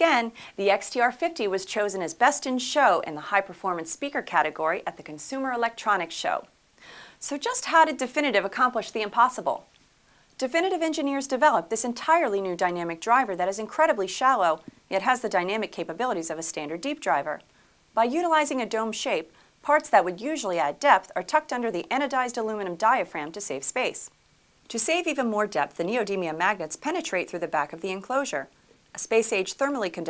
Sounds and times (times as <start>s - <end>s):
Speech: 0.0s - 6.5s, 7.2s - 9.7s, 10.4s - 24.1s, 24.7s - 30.0s.